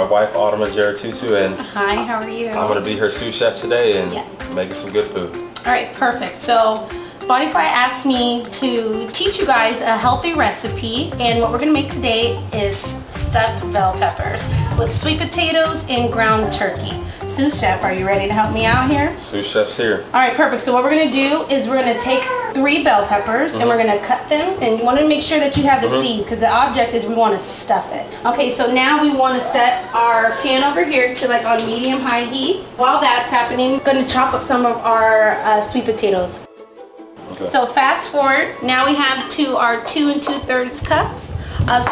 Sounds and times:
Speech: 0.0 - 36.4, 37.3 - 41.9
Music: 0.0 - 41.9.

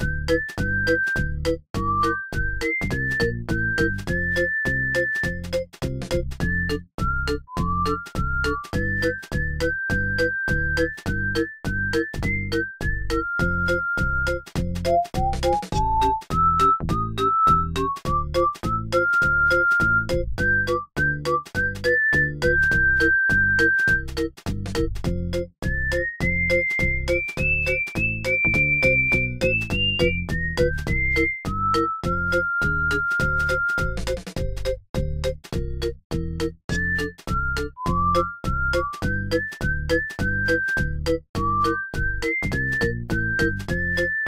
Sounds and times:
Music: 0.0 - 44.2.

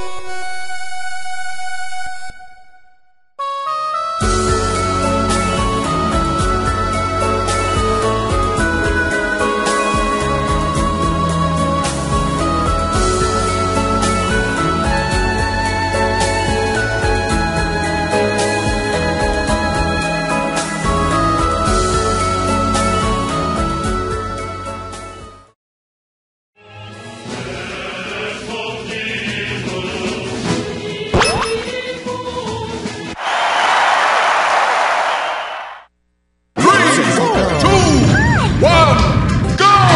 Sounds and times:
Music: 0.0 - 25.6, 26.6 - 33.2, 37.3 - 39.9.

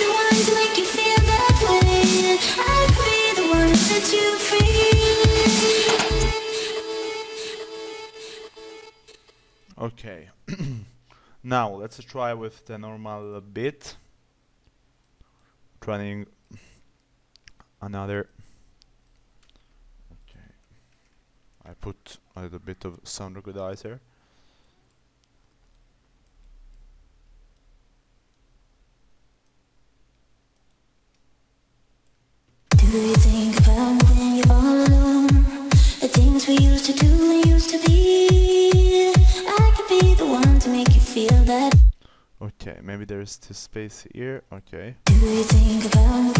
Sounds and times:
Speech: 9.8 - 10.4, 11.4 - 14.0, 15.8 - 16.4, 17.8 - 18.4, 21.6 - 24.0, 42.4 - 45.0.

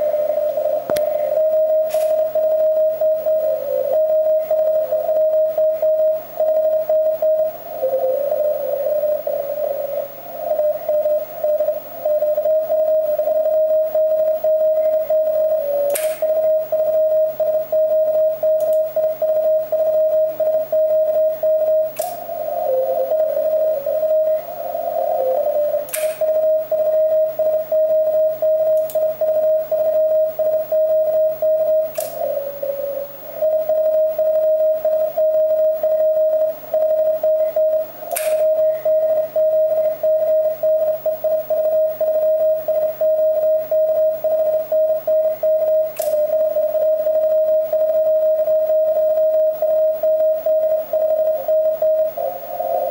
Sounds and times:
Radio: 0.0 - 52.9.

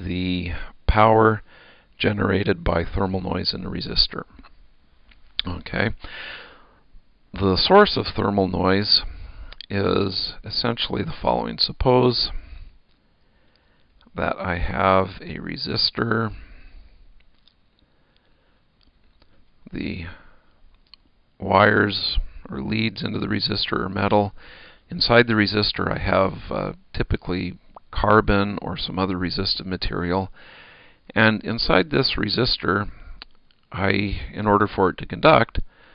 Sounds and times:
Speech: 0.0 - 1.4, 2.0 - 4.4, 5.4 - 6.0, 7.3 - 12.5, 14.1 - 16.4, 19.7 - 20.3, 21.4 - 30.3, 31.1 - 33.1, 33.7 - 35.7.

